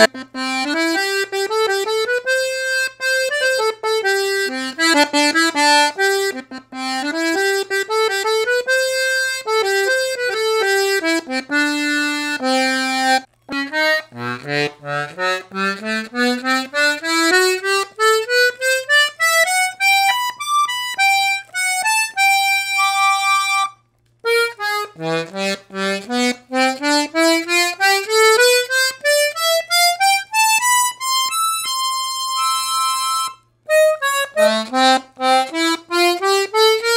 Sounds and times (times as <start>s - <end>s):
Accordion: 0.0s - 36.9s.